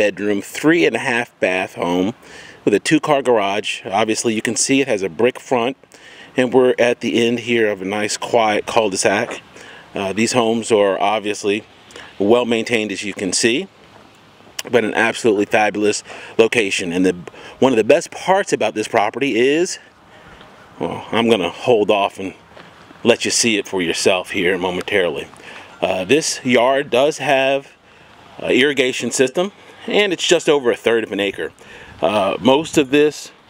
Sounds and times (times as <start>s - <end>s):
Speech: 0.0s - 5.8s, 6.4s - 13.7s, 14.6s - 19.9s, 20.8s - 22.4s, 23.0s - 27.8s, 28.4s - 33.4s.